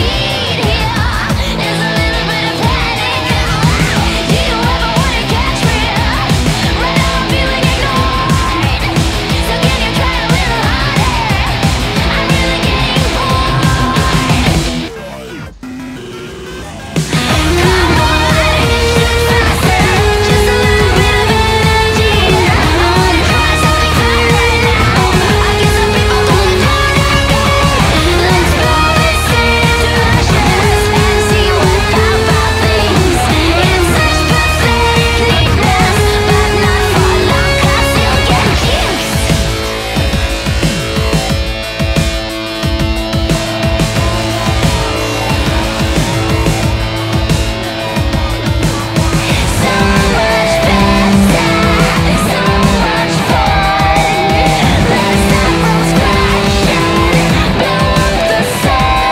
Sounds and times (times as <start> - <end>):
Electric guitar: 0.0 - 59.1.